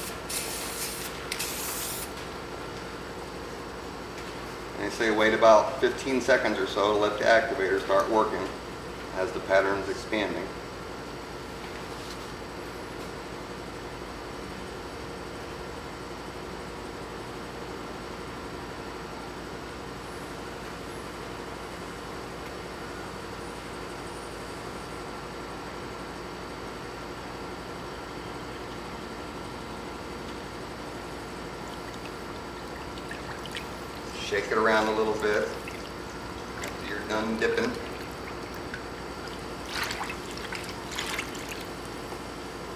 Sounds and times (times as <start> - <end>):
Speech: 4.8 - 10.6, 34.2 - 35.6, 36.8 - 37.8.